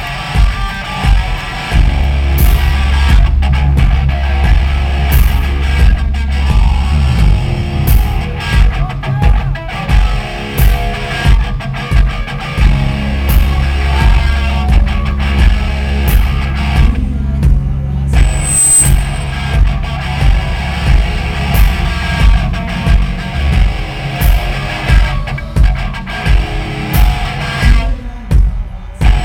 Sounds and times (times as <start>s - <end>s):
Music: 0.0s - 29.2s.